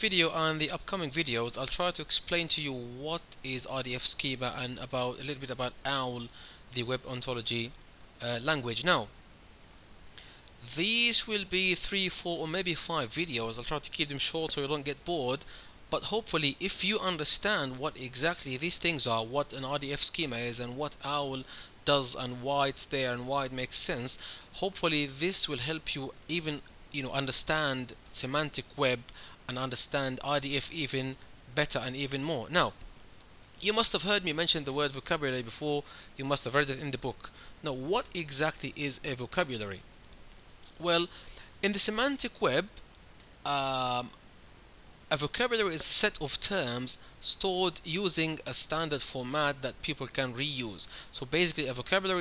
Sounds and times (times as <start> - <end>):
Speech: 0.0 - 9.1, 10.6 - 32.8, 33.6 - 39.8, 40.8 - 42.8, 43.5 - 44.2, 45.1 - 52.2.